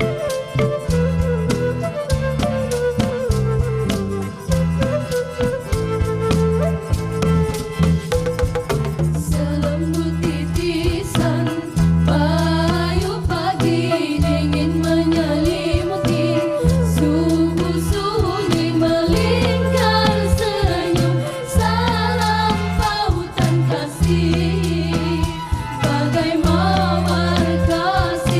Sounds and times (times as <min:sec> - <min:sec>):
Music: 0:00.0 - 0:28.3.